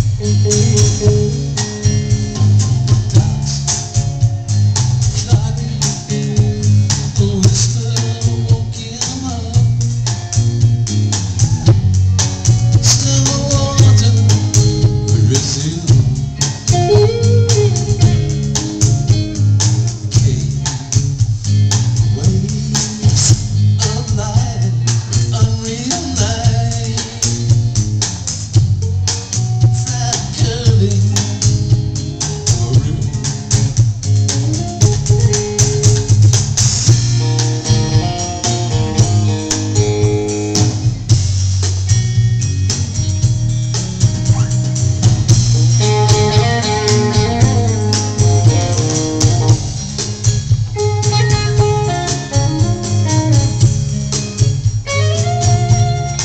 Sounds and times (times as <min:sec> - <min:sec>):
Music: 0:00.0 - 0:56.2.